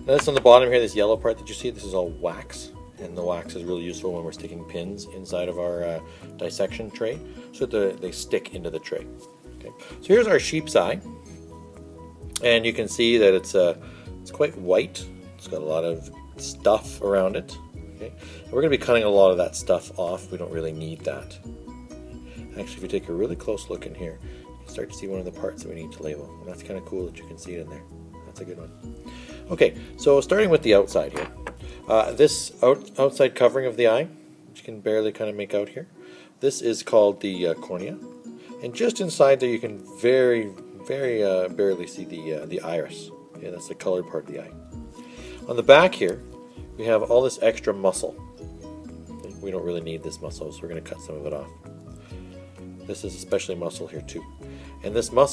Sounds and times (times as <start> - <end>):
Music: 0.0 - 55.3
Speech: 0.1 - 11.0, 12.4 - 21.4, 22.5 - 28.7, 29.5 - 31.2, 31.9 - 38.0, 38.6 - 44.5, 45.5 - 46.2, 46.8 - 48.2, 49.2 - 51.5, 52.9 - 55.3.